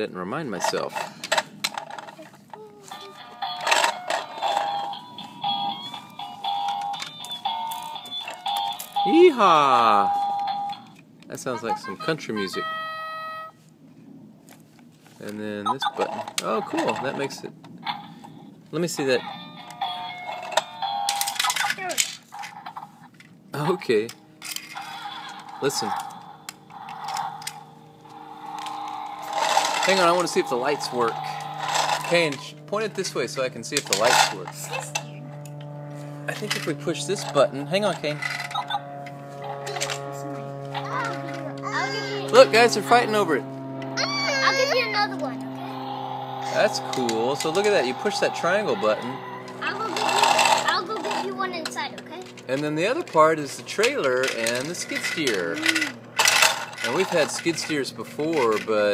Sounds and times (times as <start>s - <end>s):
Car: 21.3s - 58.9s.